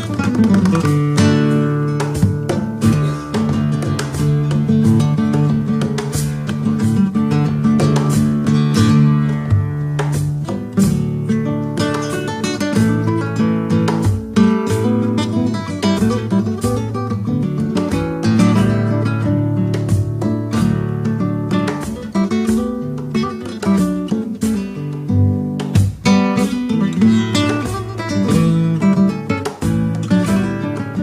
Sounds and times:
Acoustic guitar: 0.0 - 31.0.

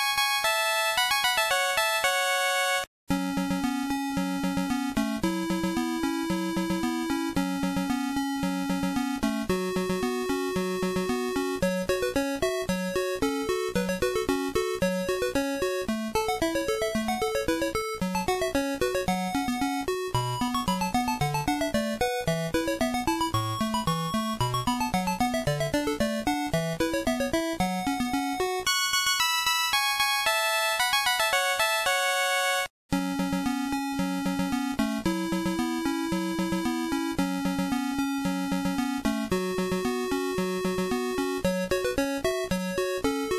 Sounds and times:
Video game music: 0.0 - 43.3.

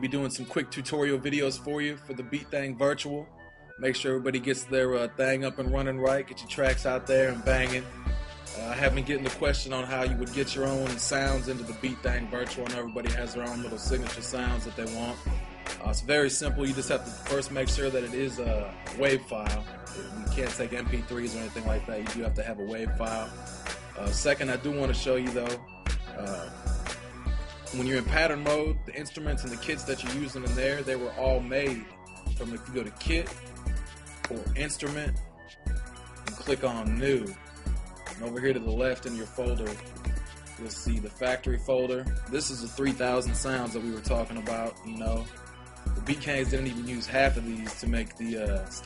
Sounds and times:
Speech: 0.0 - 7.9, 8.5 - 23.3, 24.0 - 26.6, 27.7 - 33.4, 34.3 - 35.2, 36.3 - 37.4, 38.2 - 39.8, 40.6 - 45.3, 46.0 - 48.8
Music: 0.0 - 48.8.

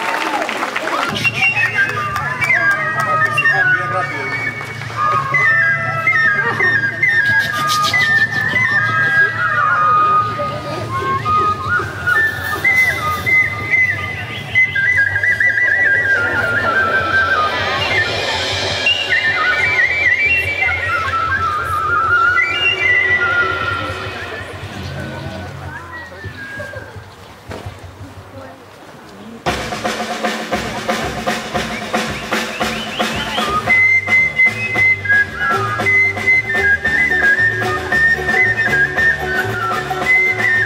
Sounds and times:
Speech: 0.0 - 11.5, 22.8 - 30.5, 33.0 - 33.8.

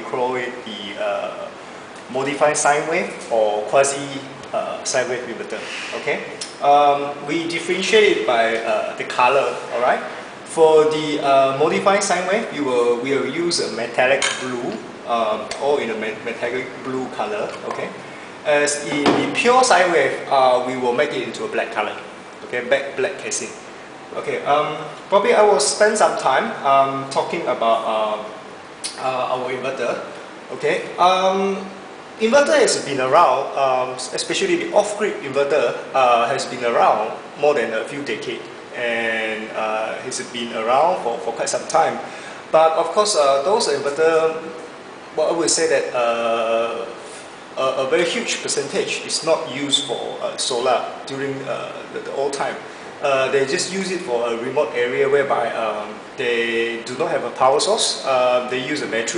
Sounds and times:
Speech: 0.0 - 59.1.

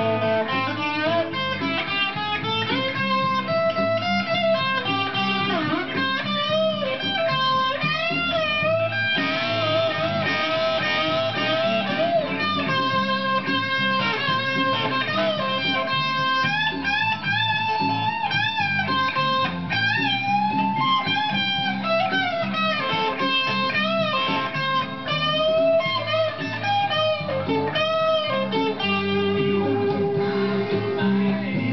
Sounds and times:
Acoustic guitar: 0.0 - 31.7
Strum: 0.0 - 31.7.

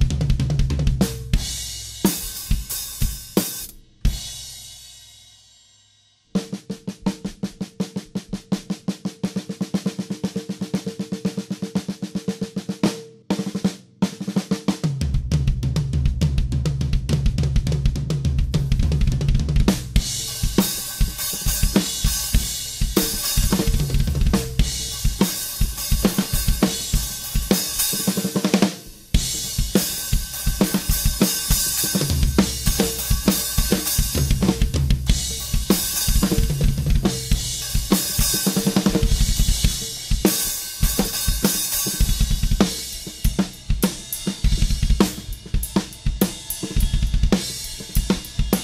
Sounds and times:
Music: 0.0 - 48.6.

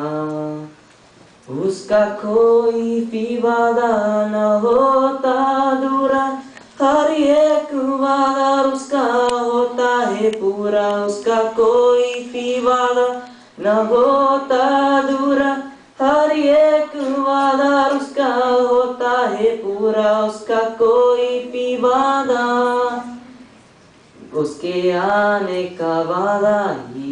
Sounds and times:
Male singing: 0.0 - 0.8, 1.5 - 23.3, 24.2 - 27.1.

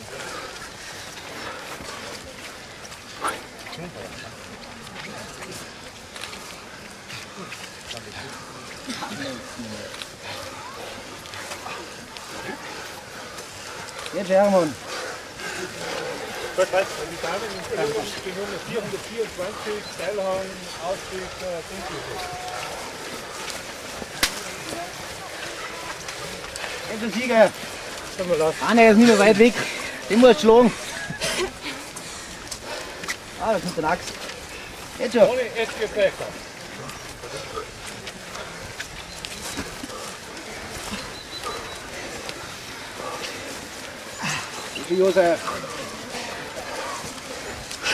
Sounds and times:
Outside, rural or natural: 0.0 - 47.9
Run: 0.0 - 47.9.

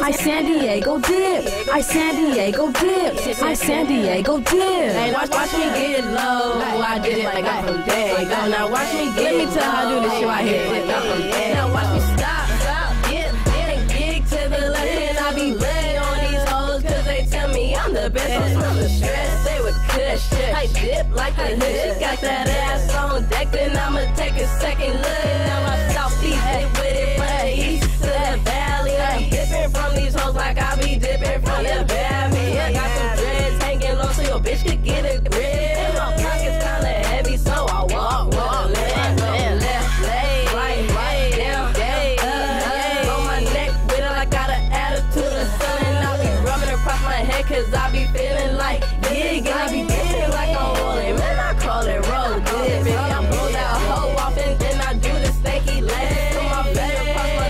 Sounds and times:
Music: 0.0 - 57.4.

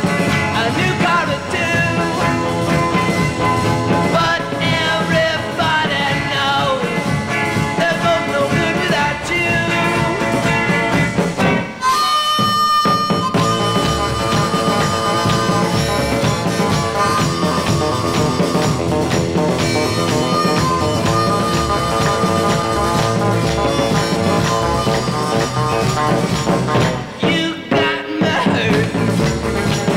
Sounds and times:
Punk rock: 0.0 - 29.9
Ska: 0.0 - 29.9
Swing music: 0.0 - 29.9.

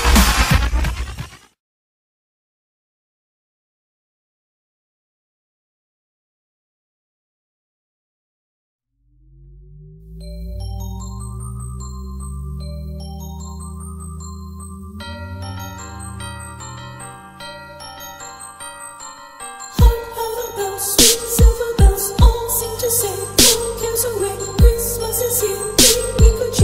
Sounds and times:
Electronic music: 0.0 - 1.4, 9.1 - 26.6.

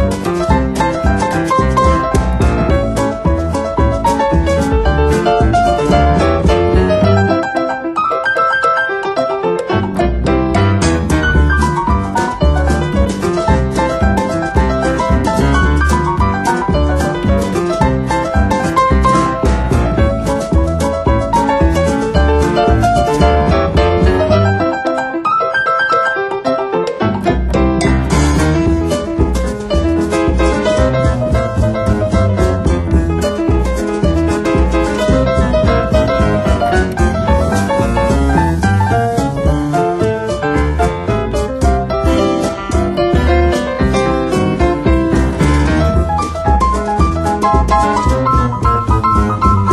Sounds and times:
Music: 0.0 - 49.7.

